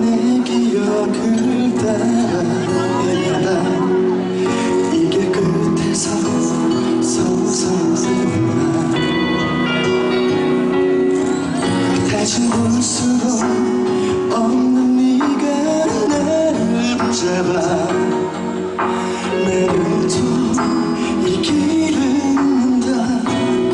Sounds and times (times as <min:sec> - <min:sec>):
Male singing: 0:00.0 - 0:09.5, 0:12.0 - 0:18.5, 0:19.2 - 0:23.7
Music: 0:00.0 - 0:23.7.